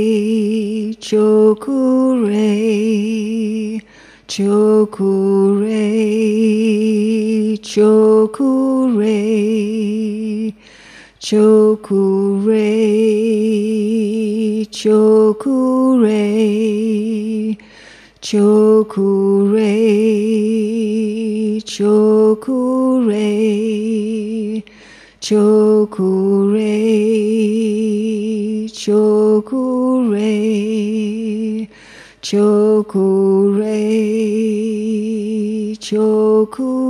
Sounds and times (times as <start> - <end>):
Mantra: 0.0 - 10.6, 11.2 - 36.9.